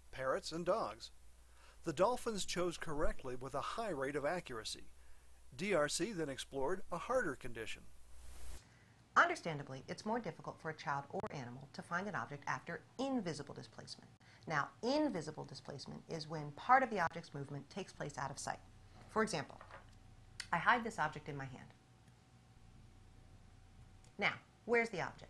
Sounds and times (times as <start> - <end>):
Inside, small room: 0.0 - 25.2
Speech: 9.2 - 19.6, 20.4 - 21.8, 24.2 - 25.2.